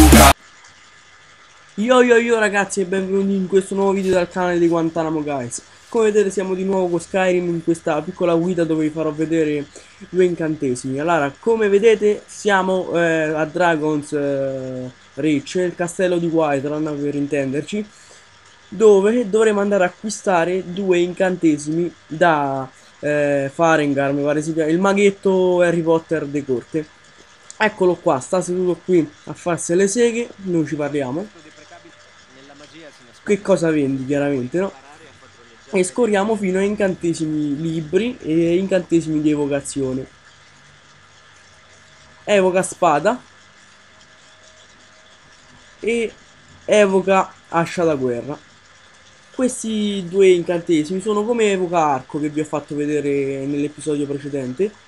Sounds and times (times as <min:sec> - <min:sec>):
Speech: 0:00.0 - 0:00.4, 0:01.8 - 0:18.0, 0:18.7 - 0:26.9, 0:27.5 - 0:40.1, 0:42.3 - 0:43.3, 0:45.8 - 0:48.4, 0:49.4 - 0:54.8.